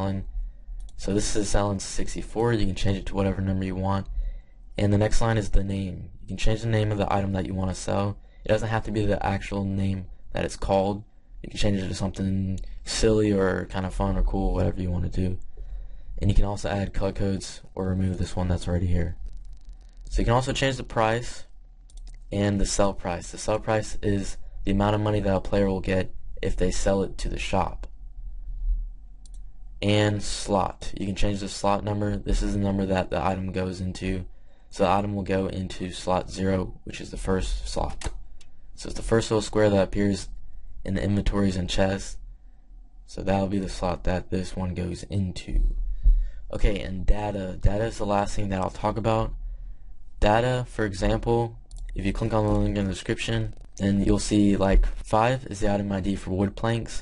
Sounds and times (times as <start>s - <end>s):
Speech: 0.0s - 4.2s, 4.8s - 15.5s, 16.2s - 19.2s, 20.1s - 21.5s, 22.2s - 27.9s, 29.8s - 38.2s, 38.8s - 42.2s, 43.1s - 45.8s, 46.5s - 49.4s, 50.2s - 57.0s.